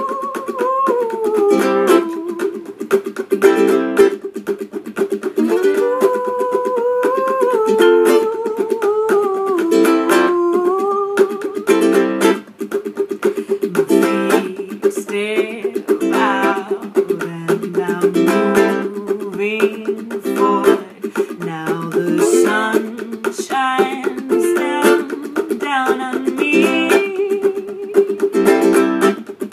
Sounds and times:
Singing: 0.0s - 2.7s, 5.6s - 11.9s, 13.7s - 28.3s
Ukulele: 0.0s - 29.5s.

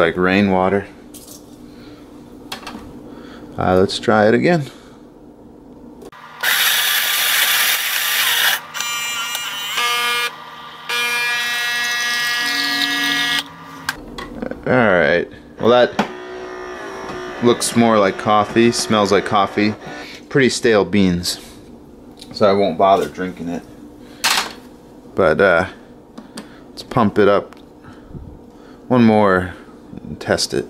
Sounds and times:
Speech: 0.0s - 1.0s, 3.6s - 4.8s, 14.4s - 16.0s, 17.4s - 21.5s, 22.3s - 23.7s, 25.2s - 25.8s, 26.8s - 27.5s, 28.9s - 30.7s.

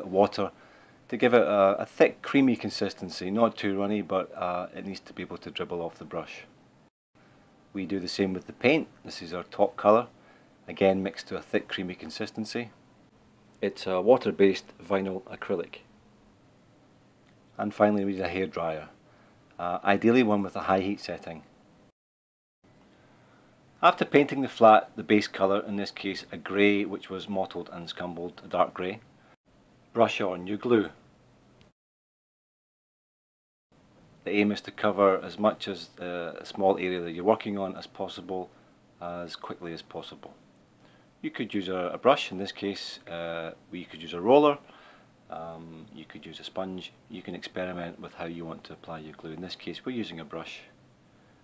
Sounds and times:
Speech: 0.0s - 6.5s, 7.7s - 10.1s, 10.7s - 12.8s, 13.6s - 15.9s, 17.6s - 19.0s, 19.6s - 21.5s, 23.8s - 29.0s, 29.9s - 31.0s, 34.3s - 40.4s, 41.2s - 44.7s, 45.3s - 50.8s.

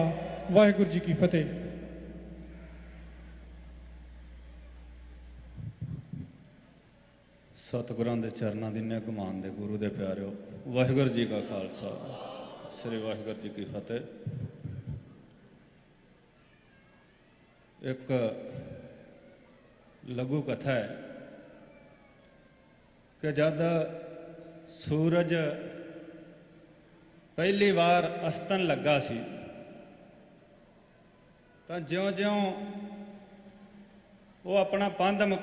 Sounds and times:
Male speech, man speaking: 0.0s - 1.7s, 7.6s - 14.1s, 17.8s - 18.4s, 20.1s - 21.0s, 23.2s - 24.0s, 24.8s - 25.8s, 27.4s - 29.6s, 31.7s - 32.7s, 34.5s - 35.4s
Narration, monologue: 0.0s - 15.1s, 17.8s - 19.2s, 20.0s - 30.5s, 31.7s - 35.4s.

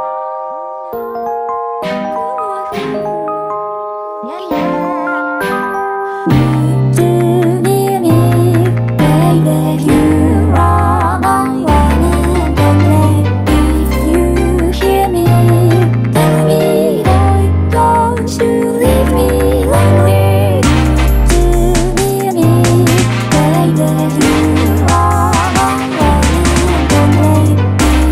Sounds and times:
Rhythm and blues: 0.9s - 28.1s.

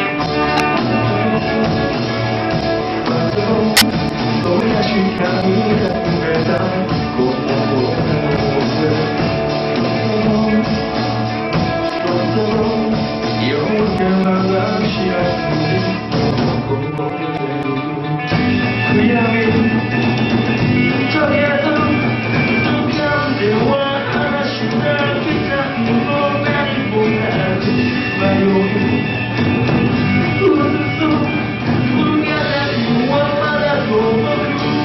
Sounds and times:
Blues: 0.0s - 34.8s.

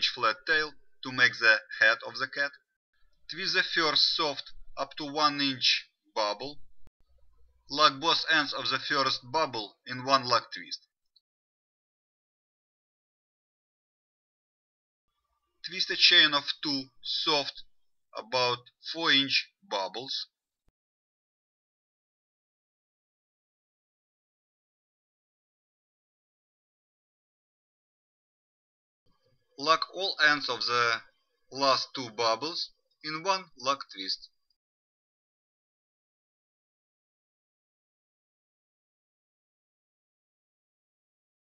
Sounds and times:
Speech: 0.0s - 2.7s, 3.3s - 6.6s, 7.7s - 11.0s, 15.6s - 20.4s, 29.6s - 34.4s.

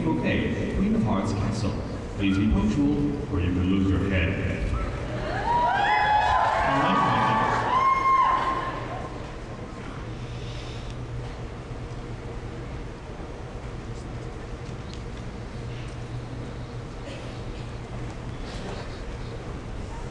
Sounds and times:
Speech: 0.0s - 4.8s.

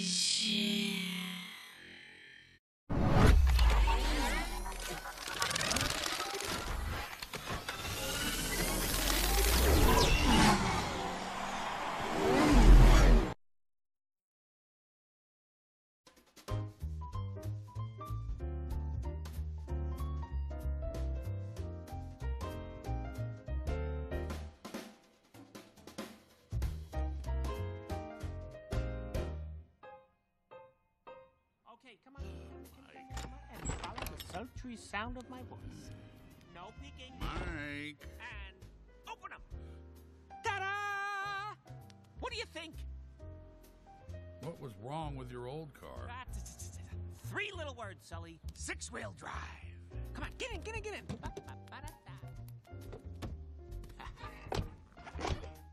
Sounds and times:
Speech: 0.0s - 1.6s, 31.7s - 35.9s, 36.5s - 39.5s, 40.4s - 41.6s, 42.2s - 42.9s, 44.4s - 52.4s, 54.0s - 54.5s
Music: 16.1s - 55.7s.

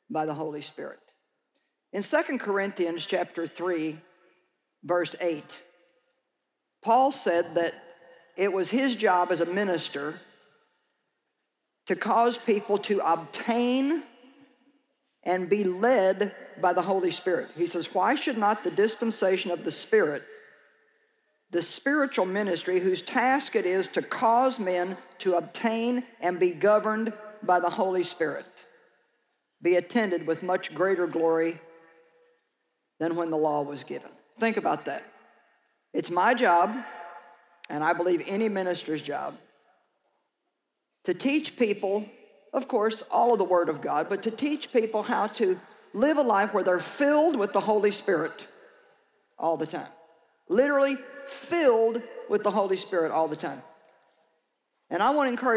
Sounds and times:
Speech: 0.1s - 1.0s, 2.0s - 4.0s, 4.9s - 5.6s, 6.8s - 7.8s, 8.4s - 10.2s, 11.9s - 14.1s, 15.3s - 20.2s, 21.5s - 28.6s, 29.6s - 31.6s, 33.0s - 35.1s, 36.0s - 36.9s, 37.7s - 39.4s, 41.0s - 48.5s, 49.4s - 53.6s, 54.9s - 55.5s.

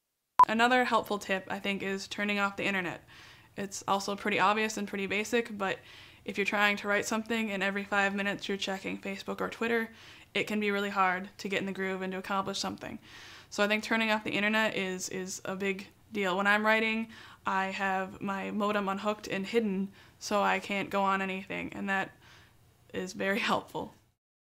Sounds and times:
Speech: 3.6s - 13.0s, 13.6s - 22.2s, 22.9s - 24.0s.

